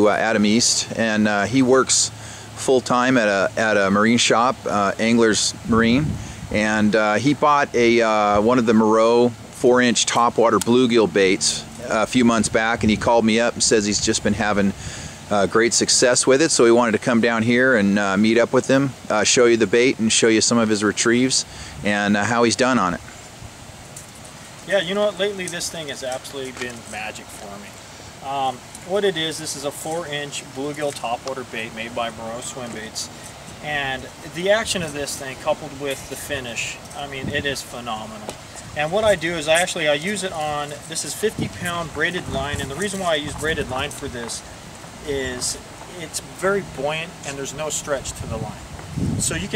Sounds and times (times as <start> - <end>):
Speech: 0.0 - 23.0, 24.6 - 44.4, 45.0 - 48.6, 49.2 - 49.5.